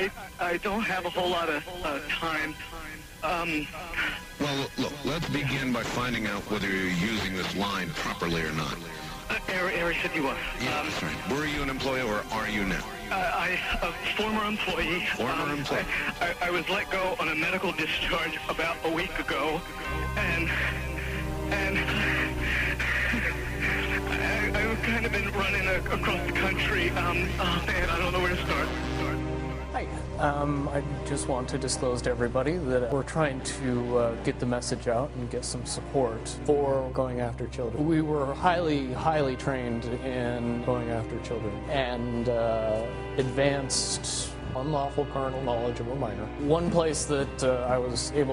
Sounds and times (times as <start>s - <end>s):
Speech: 0.0s - 2.6s, 3.2s - 19.6s, 20.2s - 20.7s, 21.5s - 29.1s, 29.7s - 48.3s
Music: 0.0s - 48.3s.